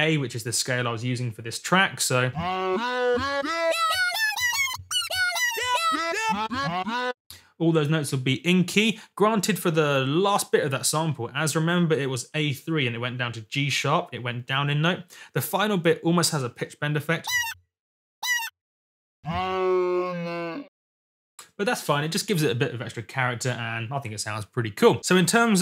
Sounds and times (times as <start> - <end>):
Speech: 0.0 - 2.4, 7.6 - 17.3, 21.5 - 25.6.